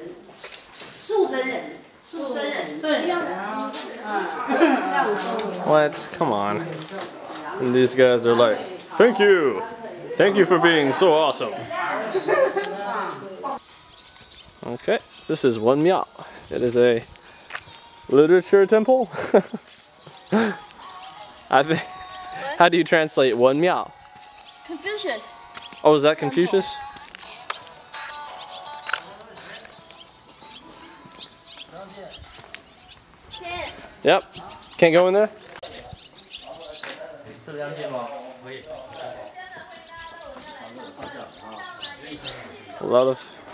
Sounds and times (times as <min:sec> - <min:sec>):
Outside, rural or natural: 0:09.0 - 0:43.5
Music: 0:17.0 - 0:33.8.